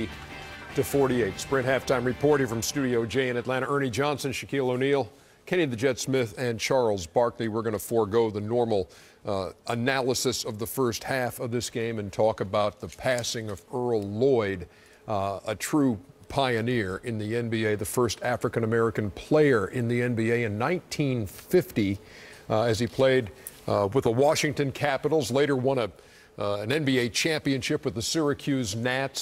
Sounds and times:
Speech: 0.7 - 29.2.

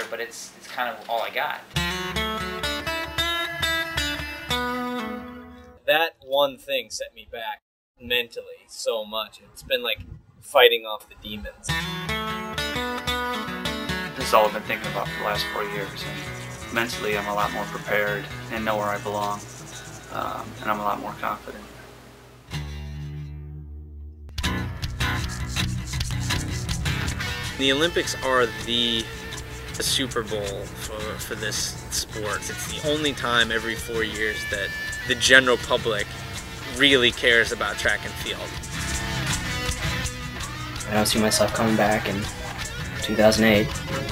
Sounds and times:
Speech: 0.0 - 1.7, 5.9 - 11.7, 14.2 - 19.4, 20.1 - 21.7, 27.6 - 29.1, 29.8 - 36.1, 36.7 - 38.5, 40.9 - 44.1
Music: 1.8 - 5.8, 11.7 - 21.2, 22.3 - 44.1.

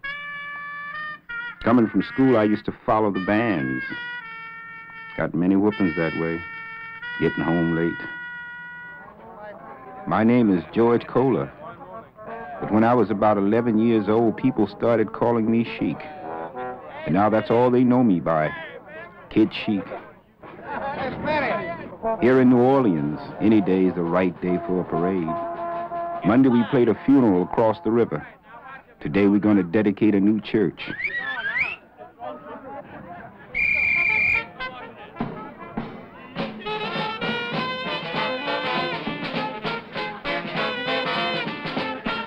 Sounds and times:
Music: 0.0 - 18.2, 20.7 - 28.3, 33.8 - 42.2
Speech: 1.6 - 4.0, 5.2 - 6.4, 7.2 - 8.1, 9.1 - 16.3, 16.9 - 25.4, 26.2 - 33.4, 34.4 - 37.0.

